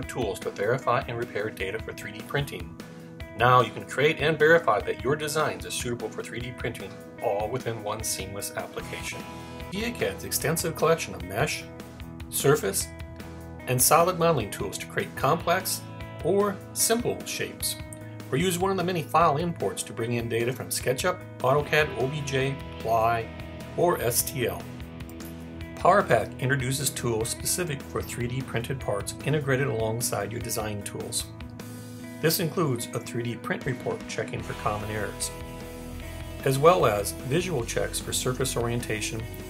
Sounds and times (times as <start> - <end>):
Speech: 0.0 - 2.7, 3.4 - 11.7, 12.3 - 12.9, 13.6 - 24.7, 25.8 - 31.3, 32.2 - 35.4, 36.4 - 39.3
Music: 0.0 - 39.4.